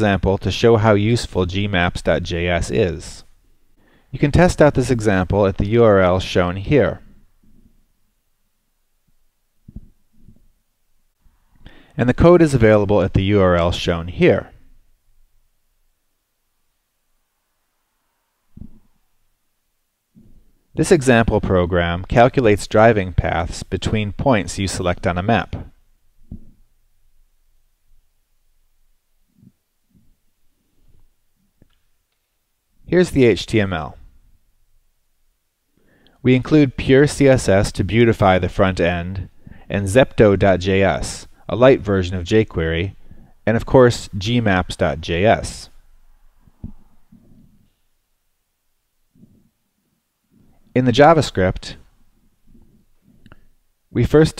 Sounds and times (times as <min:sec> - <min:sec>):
Speech: 0:00.0 - 0:03.3, 0:04.2 - 0:07.1, 0:12.0 - 0:14.6, 0:20.8 - 0:25.8, 0:32.9 - 0:34.1, 0:36.2 - 0:45.8, 0:50.7 - 0:51.9, 0:53.9 - 0:54.3.